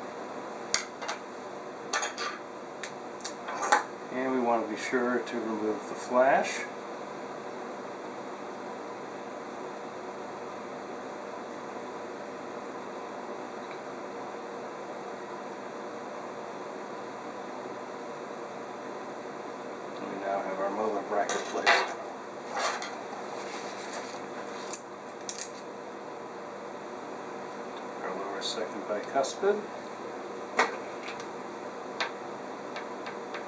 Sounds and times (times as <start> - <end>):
Speech: 4.1 - 6.8, 19.9 - 21.9, 28.0 - 29.7.